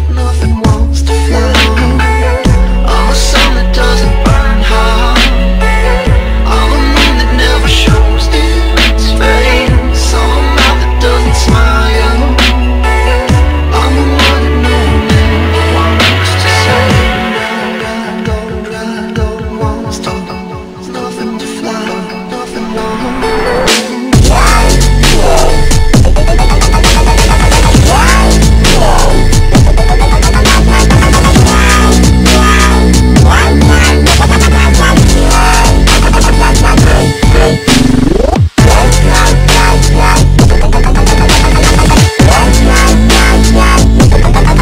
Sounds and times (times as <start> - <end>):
Dubstep: 0.0 - 44.6.